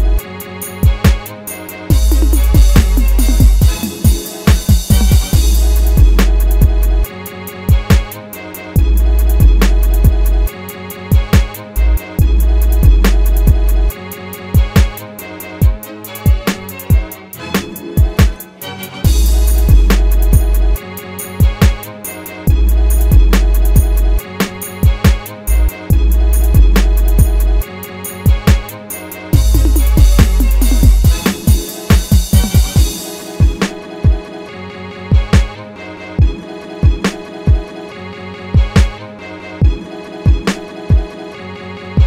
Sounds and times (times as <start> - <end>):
Music: 0.0 - 42.0.